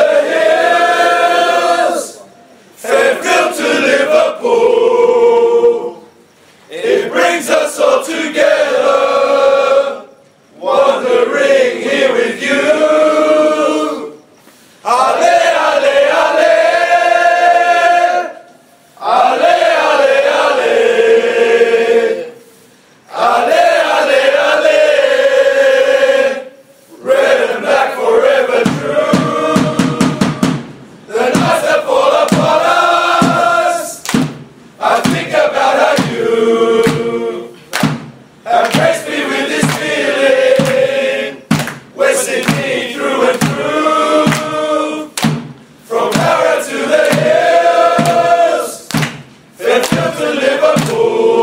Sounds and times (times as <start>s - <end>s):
Mantra: 0.0s - 51.4s.